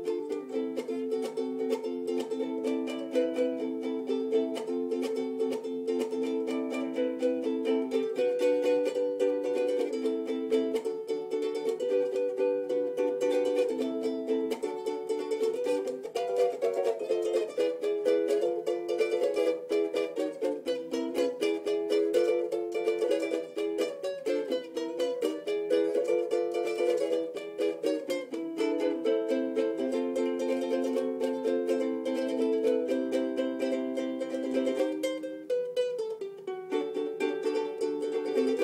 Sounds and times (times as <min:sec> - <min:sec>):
Ukulele: 0:00.0 - 0:38.6.